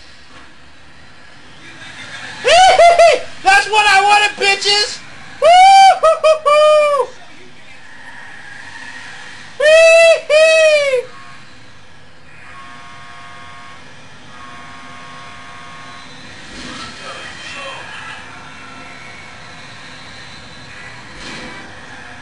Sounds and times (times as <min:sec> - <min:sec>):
Vehicle: 0:00.0 - 0:22.2.